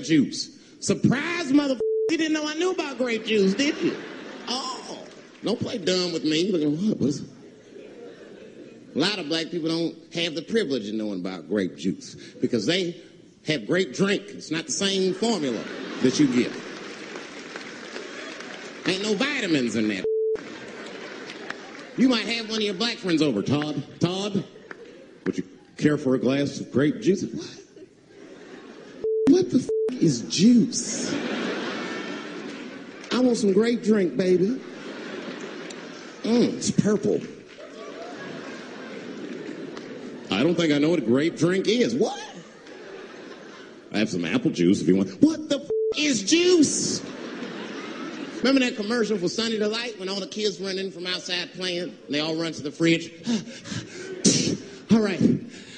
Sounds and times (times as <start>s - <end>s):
Speech: 0.0s - 7.4s, 9.0s - 16.6s, 18.8s - 20.1s, 22.0s - 24.6s, 25.2s - 27.7s, 29.3s - 31.2s, 33.1s - 34.6s, 36.2s - 37.4s, 40.3s - 42.4s, 43.9s - 47.1s, 48.4s - 53.2s, 54.3s - 55.5s.